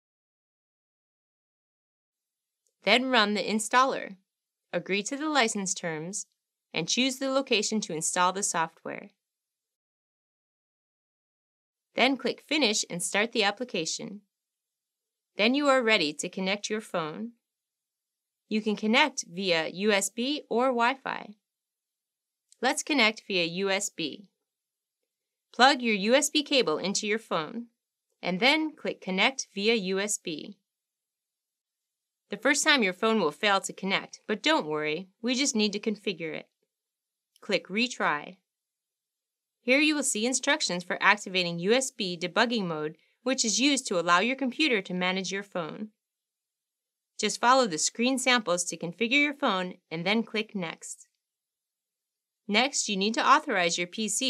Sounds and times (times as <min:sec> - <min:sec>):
Speech: 0:02.8 - 0:04.2, 0:04.8 - 0:09.2, 0:12.0 - 0:14.2, 0:15.4 - 0:17.3, 0:18.5 - 0:21.4, 0:22.6 - 0:24.3, 0:25.6 - 0:30.6, 0:32.4 - 0:36.4, 0:37.4 - 0:38.4, 0:39.7 - 0:45.9, 0:47.2 - 0:51.0, 0:52.5 - 0:54.2.